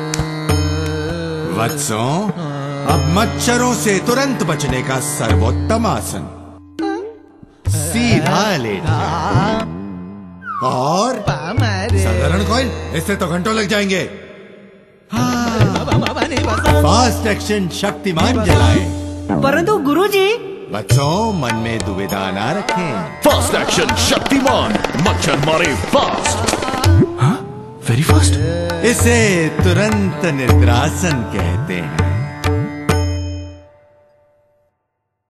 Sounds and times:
Music: 0.0 - 35.2.

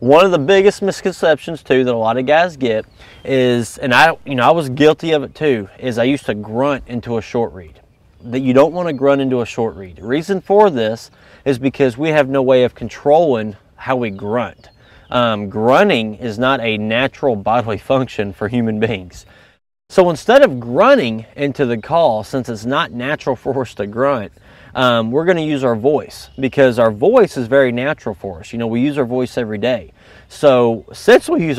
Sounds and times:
Speech: 0.0 - 19.3, 19.9 - 31.5.

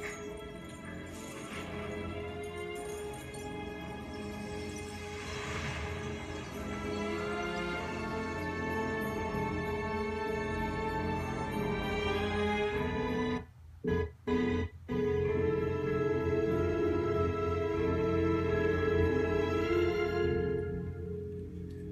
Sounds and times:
Music: 0.0 - 21.9.

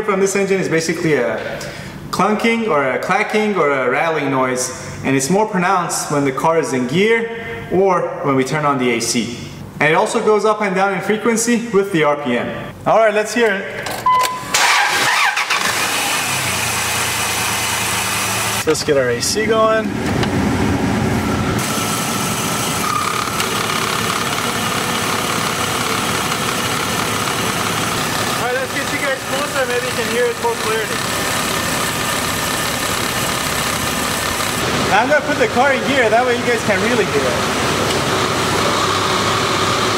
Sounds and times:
Speech: 0.0 - 13.8, 18.6 - 19.9, 28.4 - 31.0, 34.9 - 37.5.

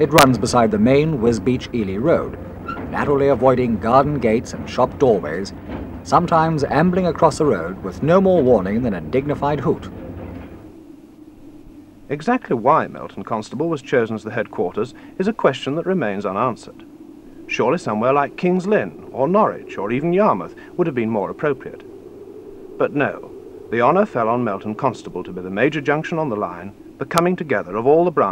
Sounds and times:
Speech: 0.0 - 5.5, 6.1 - 9.9, 12.1 - 16.8, 17.5 - 21.8, 22.8 - 28.3.

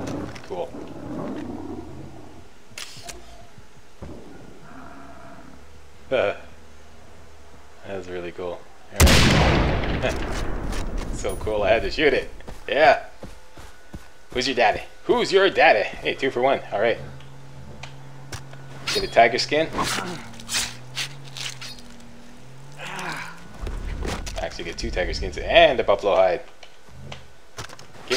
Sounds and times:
Gunshot, gunfire: 9.0 - 10.8.

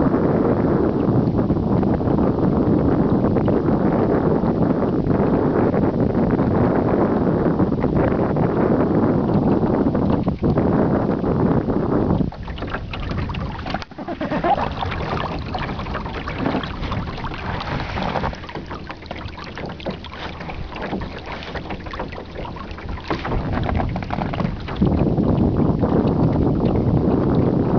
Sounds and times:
Wind noise (microphone): 0.0 - 27.7.

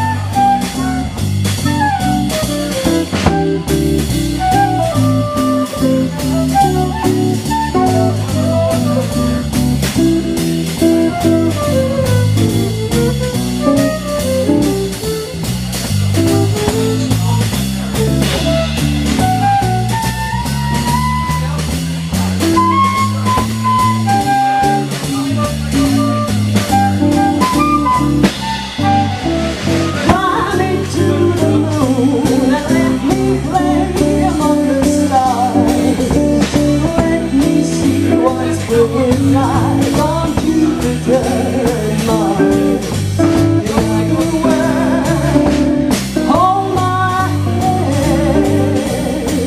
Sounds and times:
Jazz: 0.0 - 49.4
Speech: 4.9 - 27.6, 29.2 - 49.4.

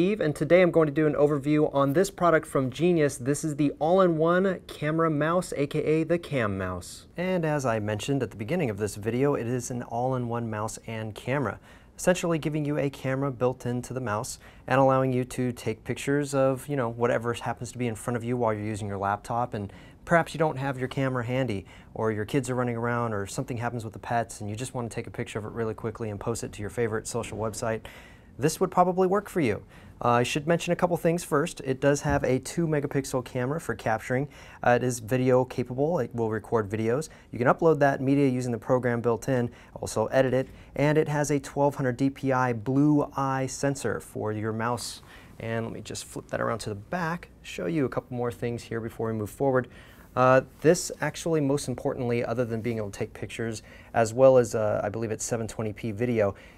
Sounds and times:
Speech: 0.0 - 56.4.

